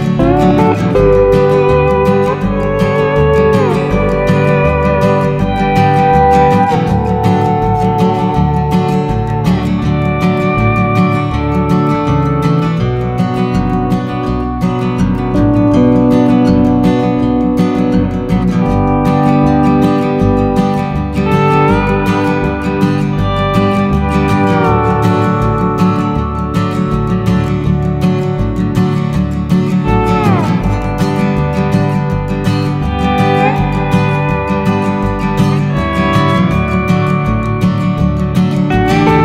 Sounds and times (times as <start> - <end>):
Guitar: 0.0 - 39.2.